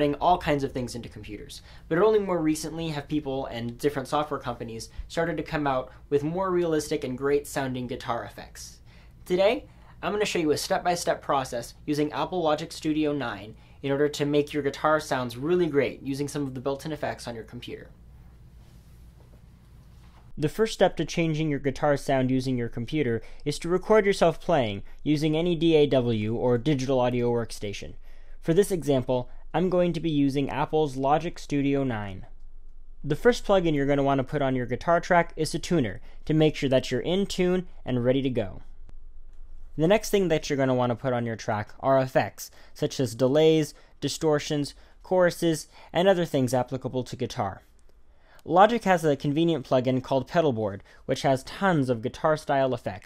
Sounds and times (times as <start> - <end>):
Speech: 0.0 - 18.0, 20.4 - 32.3, 33.0 - 38.6, 39.8 - 47.7, 48.4 - 53.0.